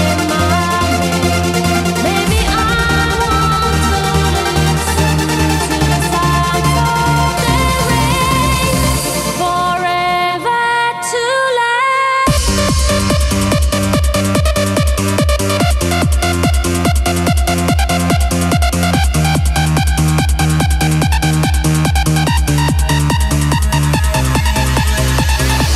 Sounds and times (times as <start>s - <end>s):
Electronic dance music: 0.0s - 11.4s, 12.3s - 25.7s
House music: 0.0s - 11.4s, 12.3s - 25.7s.